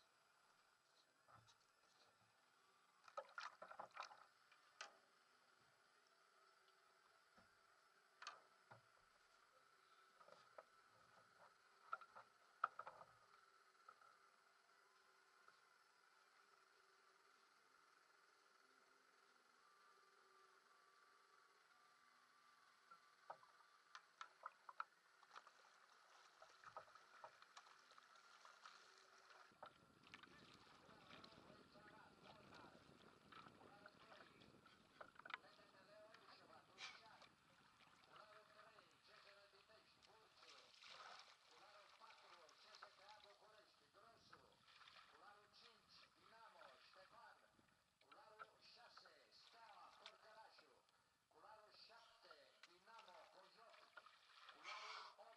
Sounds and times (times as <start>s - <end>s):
Rowboat, canoe, kayak: 0.0s - 55.3s.